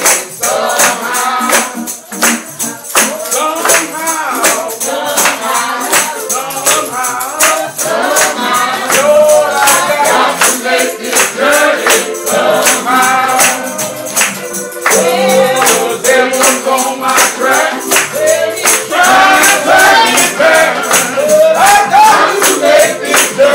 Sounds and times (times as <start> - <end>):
Independent music: 0.0 - 23.5.